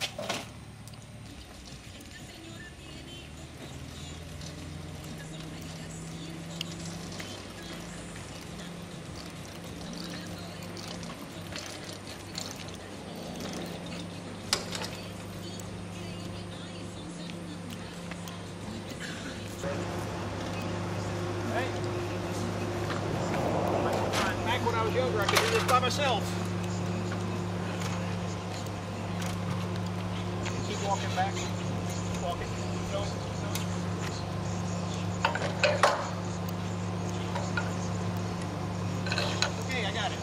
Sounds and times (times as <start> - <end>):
Vehicle: 0.0 - 40.2.